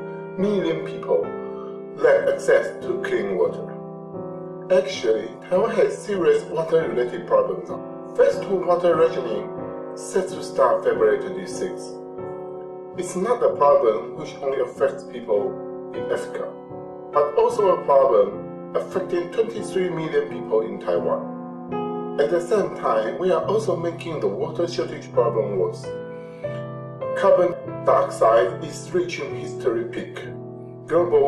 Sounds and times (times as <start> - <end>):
Music: 0.0 - 31.2
Speech: 0.4 - 1.4, 2.0 - 3.8, 4.7 - 12.0, 13.0 - 16.6, 17.2 - 21.2, 22.2 - 25.9, 27.2 - 31.2.